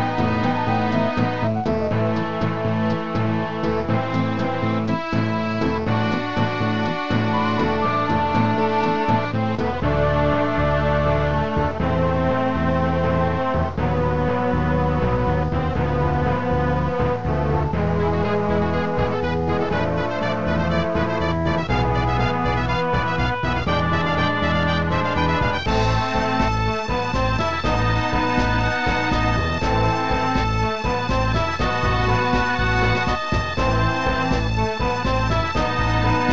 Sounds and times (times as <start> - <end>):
Exciting music: 0.0 - 36.3.